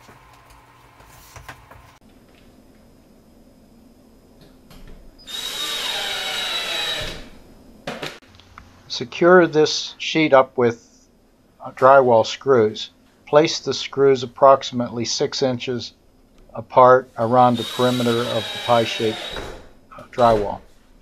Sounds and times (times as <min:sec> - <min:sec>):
Drill: 0:05.2 - 0:07.4, 0:17.5 - 0:19.6
Speech: 0:08.9 - 0:10.9, 0:11.6 - 0:16.0, 0:16.6 - 0:19.3, 0:20.0 - 0:20.7.